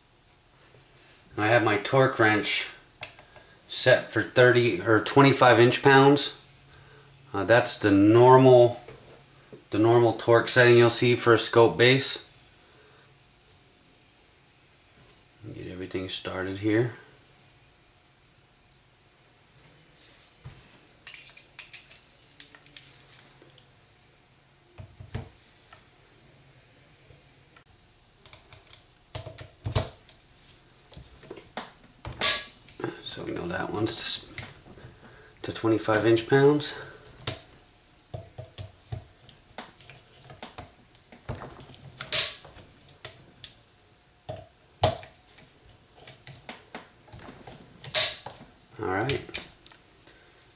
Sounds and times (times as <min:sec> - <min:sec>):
Inside, small room: 0:00.0 - 0:50.5.